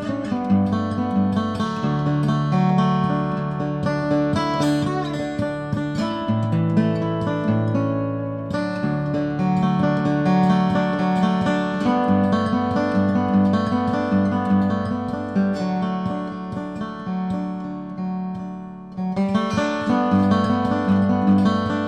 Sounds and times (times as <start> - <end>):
Acoustic guitar: 0.0 - 21.8.